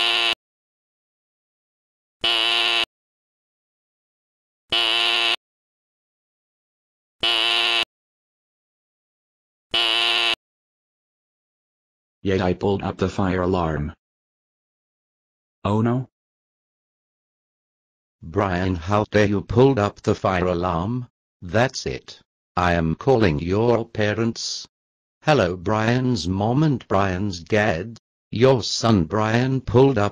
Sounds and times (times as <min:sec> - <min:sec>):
Speech: 0:12.2 - 0:14.0, 0:15.7 - 0:16.1, 0:18.2 - 0:30.1.